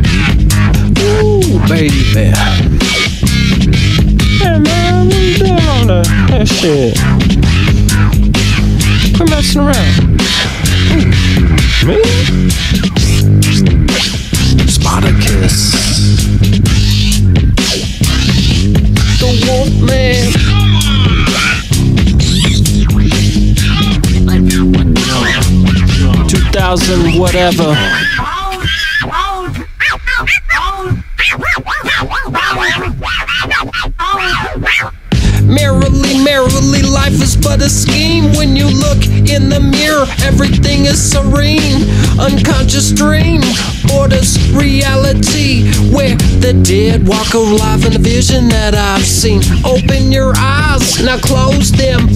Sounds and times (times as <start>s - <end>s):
Music: 0.0s - 52.1s.